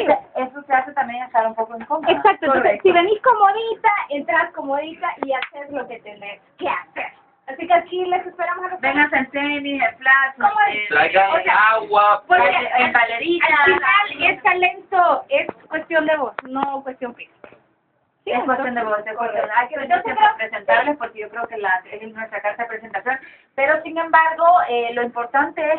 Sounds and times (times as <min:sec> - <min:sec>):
Speech: 0:00.0 - 0:17.3.